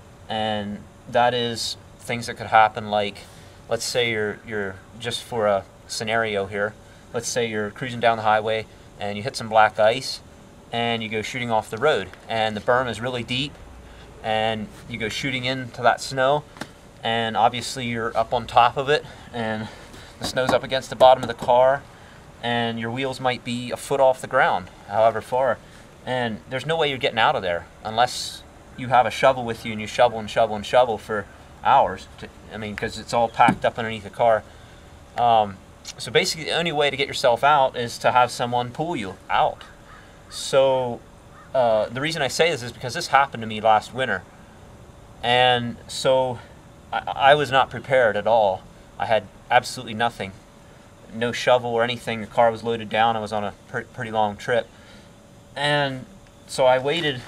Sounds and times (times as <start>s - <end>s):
Speech: 0.3s - 13.6s, 14.2s - 34.5s, 35.2s - 39.7s, 40.4s - 41.0s, 41.6s - 44.3s, 45.2s - 50.4s, 51.1s - 54.7s, 55.6s - 57.2s.